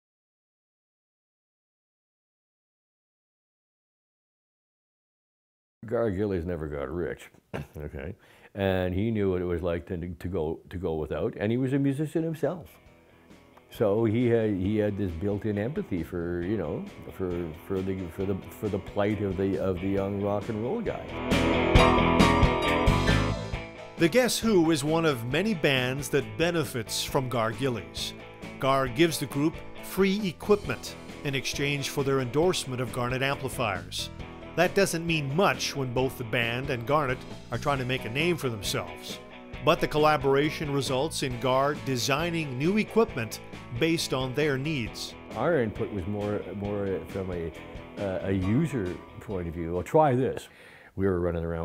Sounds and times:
Speech: 5.8 - 12.8, 13.7 - 21.1, 24.0 - 51.6.

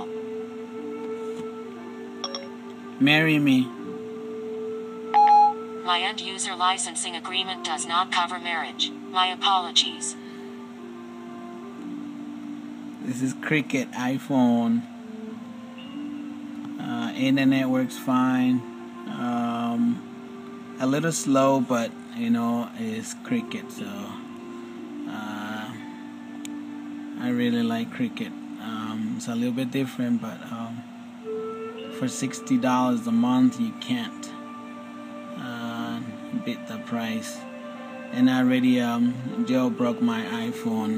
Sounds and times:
Music: 0.0 - 40.9
Speech: 13.0 - 14.8, 16.8 - 20.0, 20.8 - 24.2, 27.2 - 30.8, 38.2 - 40.9.

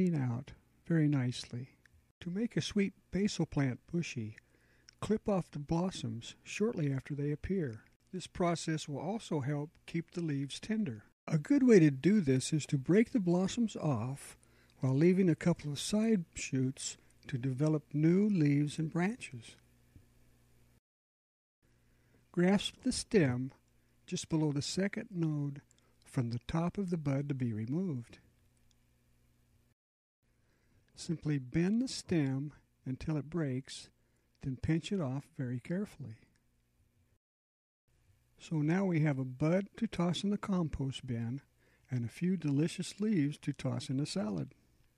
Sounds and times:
Speech: 0.0 - 4.4, 5.0 - 19.6, 22.3 - 28.2, 31.0 - 36.3, 38.4 - 44.6.

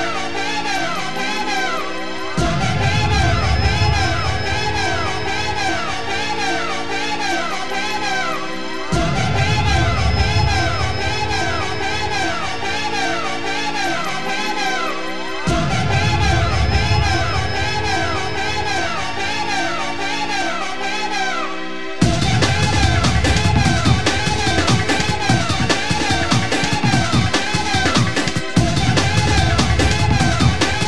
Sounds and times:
Music: 0.0 - 30.8.

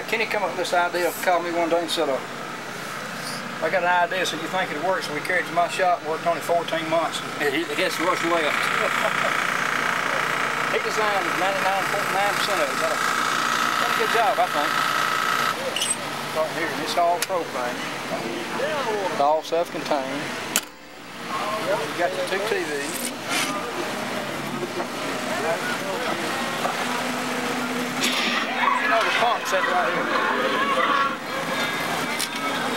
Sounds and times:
Speech: 0.0 - 2.3, 3.2 - 9.0, 10.7 - 13.0, 13.8 - 14.8.

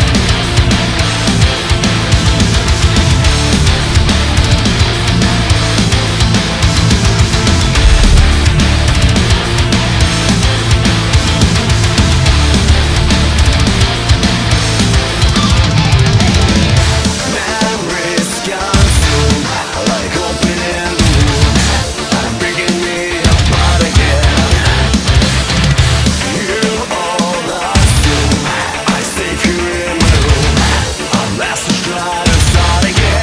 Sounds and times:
Music: 0.0 - 33.2.

